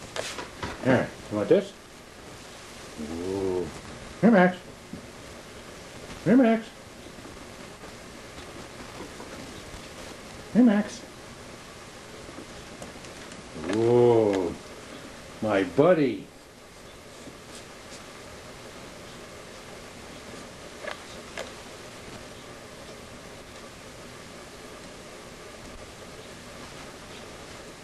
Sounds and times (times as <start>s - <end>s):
Speech: 0.8s - 1.8s, 3.0s - 4.7s, 6.2s - 6.8s, 10.5s - 11.1s, 13.6s - 14.6s, 15.4s - 16.3s.